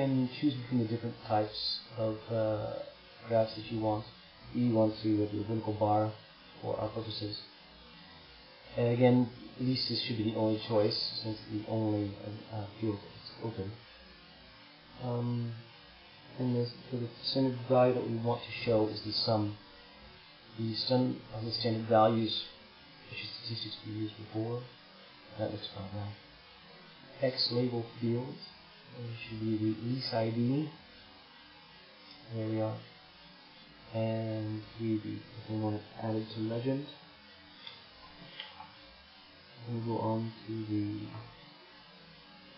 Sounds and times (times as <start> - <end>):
Speech: 0.0 - 7.5, 8.7 - 13.8, 15.0 - 15.7, 16.3 - 19.6, 20.6 - 24.7, 25.3 - 26.2, 27.2 - 30.8, 32.2 - 32.9, 33.9 - 37.0, 39.6 - 41.4
Inside, small room: 0.0 - 42.5.